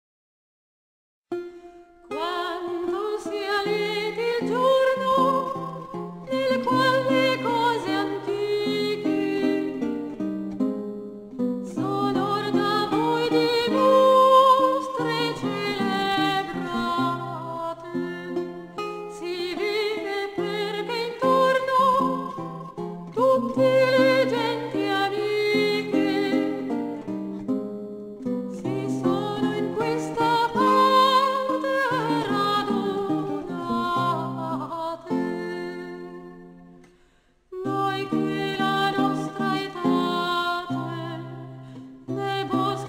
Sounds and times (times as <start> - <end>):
Music: 1.3 - 42.8.